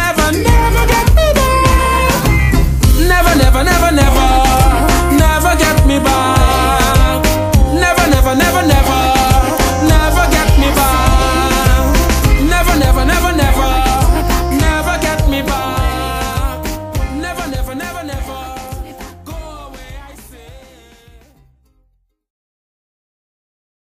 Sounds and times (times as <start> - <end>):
Rhythm and blues: 0.0 - 21.6.